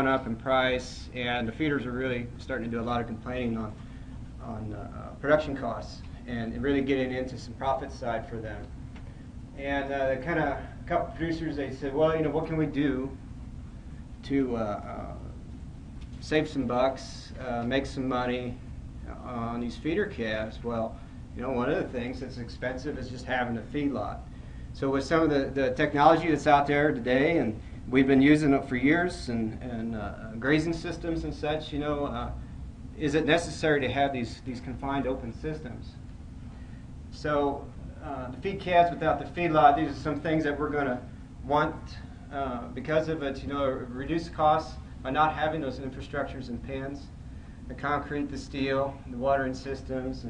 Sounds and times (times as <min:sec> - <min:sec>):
Speech: 0:00.0 - 0:03.8, 0:04.4 - 0:08.7, 0:09.6 - 0:13.2, 0:14.2 - 0:15.4, 0:16.2 - 0:32.4, 0:33.0 - 0:36.0, 0:37.1 - 0:50.2.